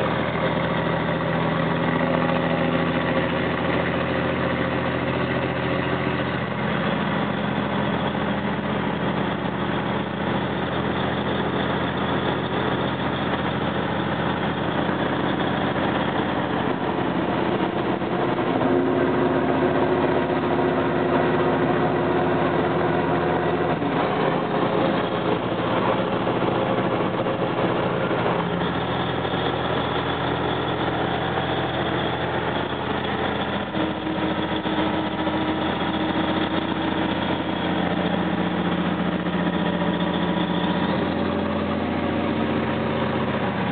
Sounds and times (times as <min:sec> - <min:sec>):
Vehicle: 0:00.0 - 0:43.7.